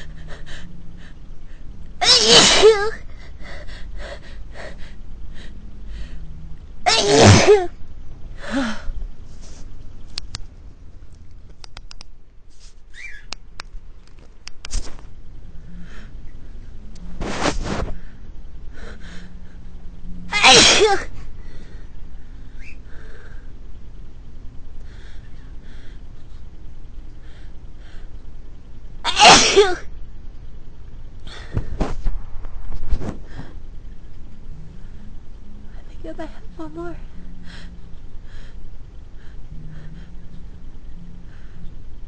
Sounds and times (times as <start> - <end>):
Sneeze: 2.0 - 2.8, 6.9 - 7.7, 20.3 - 21.1, 29.1 - 29.8.